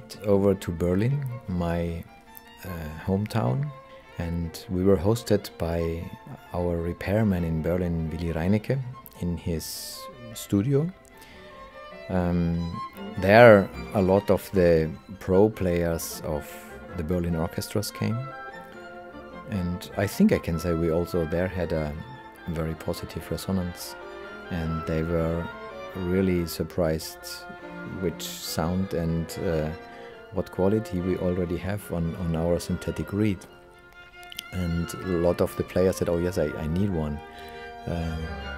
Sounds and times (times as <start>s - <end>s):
Speech: 0.0s - 11.0s, 12.1s - 18.3s, 19.5s - 29.8s, 30.4s - 33.5s, 34.3s - 37.2s, 37.8s - 38.5s
Music: 0.0s - 38.5s.